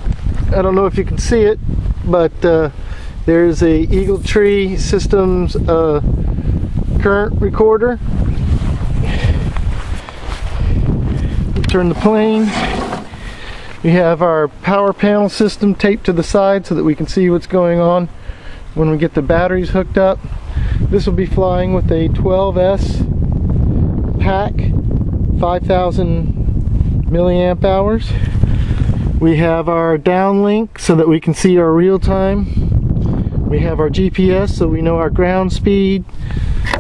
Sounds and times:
Speech: 0:00.5 - 0:02.7, 0:03.3 - 0:06.0, 0:07.0 - 0:08.0, 0:11.6 - 0:12.9, 0:13.8 - 0:18.1, 0:18.8 - 0:20.2, 0:20.9 - 0:23.1, 0:24.2 - 0:24.7, 0:25.4 - 0:26.3, 0:27.1 - 0:28.2, 0:29.2 - 0:32.5, 0:33.5 - 0:36.1.

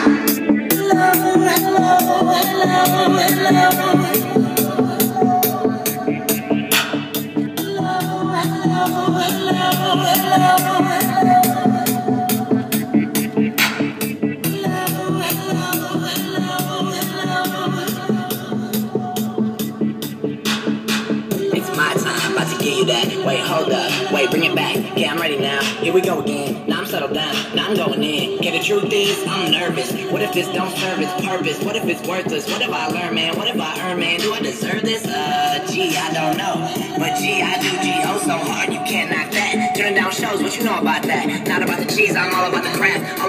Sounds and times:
Music: 0:00.0 - 0:43.2.

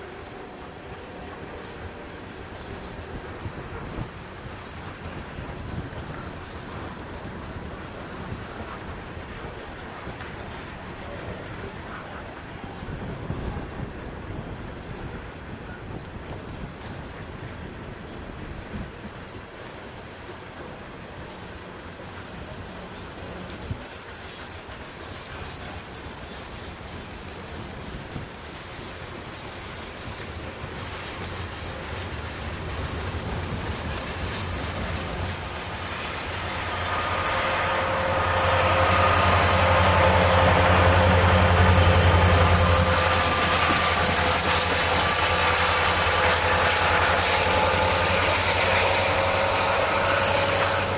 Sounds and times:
Railroad car, train wagon: 0:00.0 - 0:50.9
Train: 0:00.0 - 0:50.9
Clickety-clack: 0:21.7 - 0:37.4.

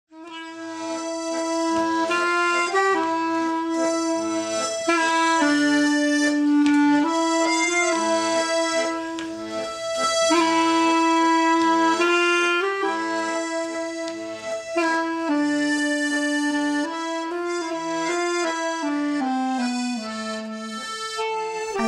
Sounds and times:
Accordion: 0:00.1 - 0:21.8.

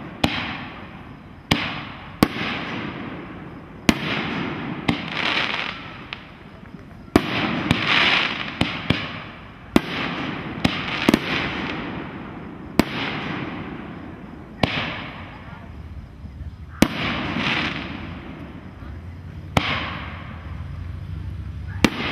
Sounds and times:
Fireworks: 0:00.0 - 0:22.1
Speech: 0:15.2 - 0:16.9.

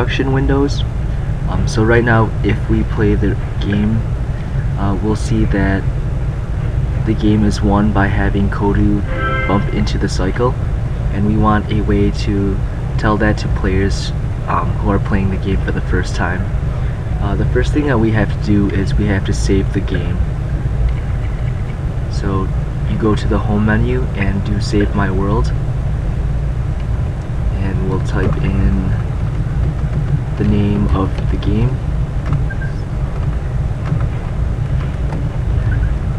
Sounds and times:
Speech: 0:00.0 - 0:05.9, 0:07.0 - 0:20.3, 0:22.1 - 0:25.6, 0:27.5 - 0:29.0, 0:30.4 - 0:31.8
Music: 0:09.0 - 0:09.9.

